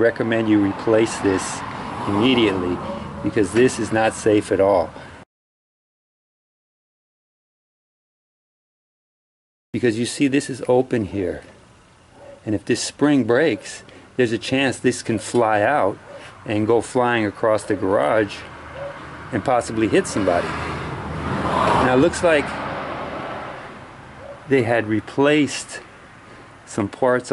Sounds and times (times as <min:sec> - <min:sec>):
Speech: 0:00.0 - 0:05.0, 0:09.8 - 0:11.6, 0:12.4 - 0:18.5, 0:19.3 - 0:20.5, 0:21.8 - 0:22.6, 0:24.5 - 0:25.9, 0:26.7 - 0:27.3.